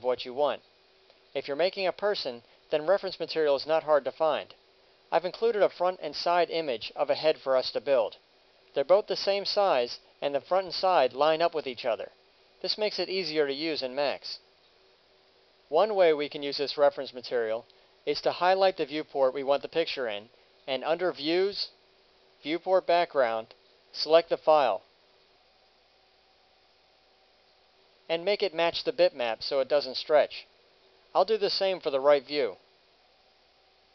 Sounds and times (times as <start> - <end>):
Speech: 0.0 - 0.6, 1.4 - 8.2, 8.8 - 14.4, 15.7 - 21.8, 22.4 - 24.9, 28.1 - 30.5, 31.2 - 32.6.